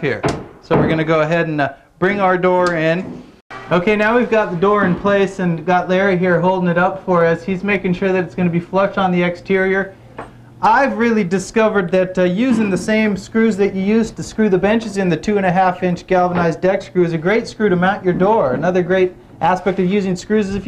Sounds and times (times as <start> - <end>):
Speech: 0.0 - 3.1, 3.7 - 9.9, 10.6 - 20.6.